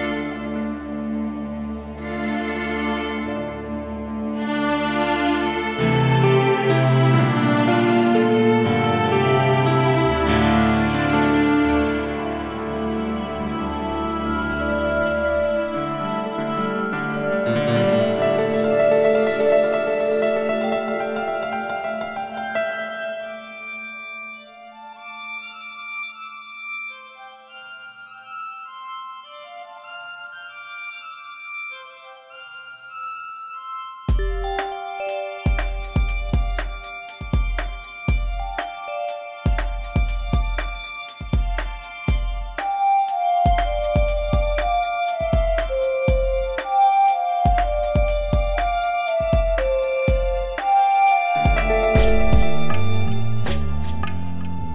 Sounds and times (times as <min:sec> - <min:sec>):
Music: 0:00.0 - 0:54.7.